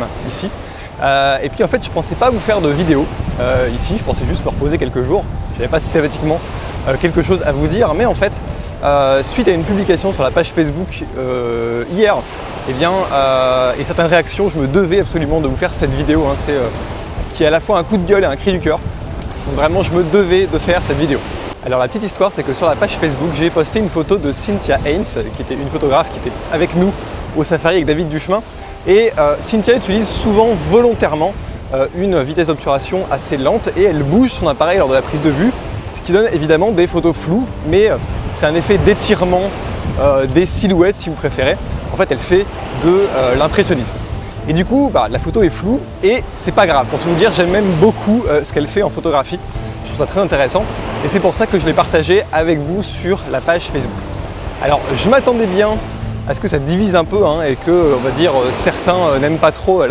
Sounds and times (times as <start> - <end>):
Speech: 0.0 - 16.8, 17.4 - 18.8, 19.4 - 54.0, 54.6 - 59.9
Music: 0.0 - 59.9.